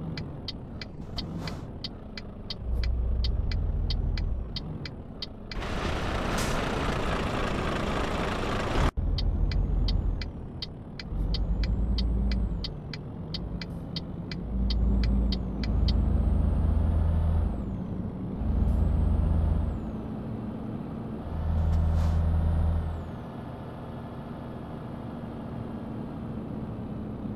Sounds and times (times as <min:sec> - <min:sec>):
Car: 0:00.0 - 0:27.3.